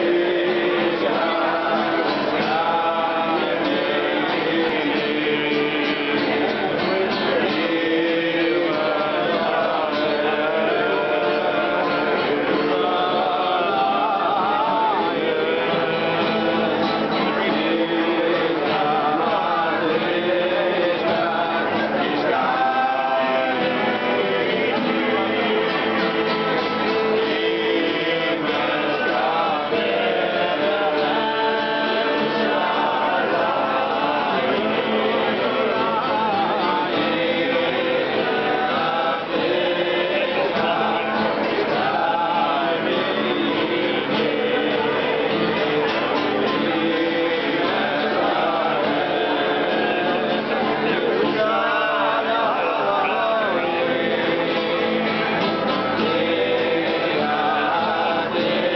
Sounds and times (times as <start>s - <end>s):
Acoustic guitar: 0.0s - 58.7s.